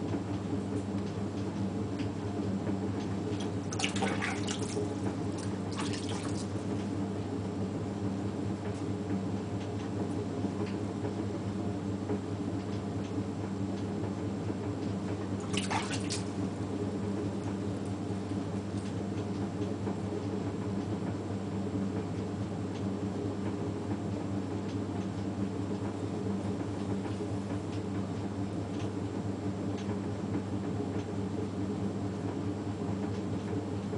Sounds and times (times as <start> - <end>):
Inside, small room: 0.0 - 33.9.